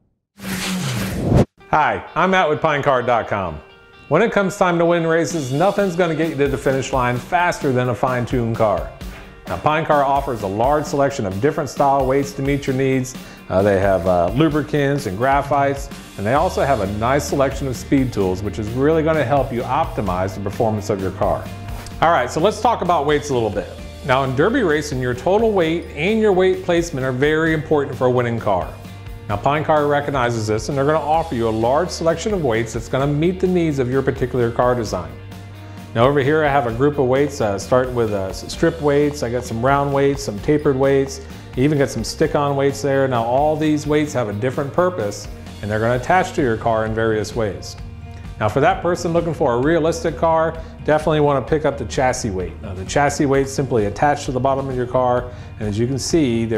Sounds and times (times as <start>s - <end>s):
Music: 0.4s - 56.5s
Speech: 1.7s - 35.2s, 36.0s - 47.8s, 48.4s - 56.5s.